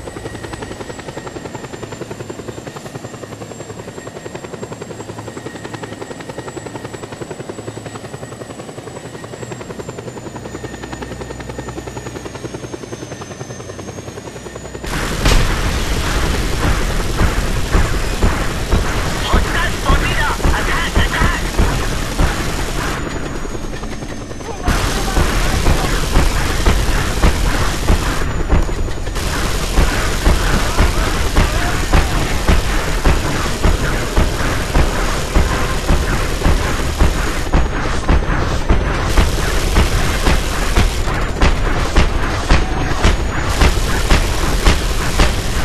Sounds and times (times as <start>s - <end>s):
Fusillade: 14.9s - 23.6s, 24.6s - 45.6s
Speech: 19.2s - 21.6s, 30.6s - 32.4s, 42.5s - 43.1s.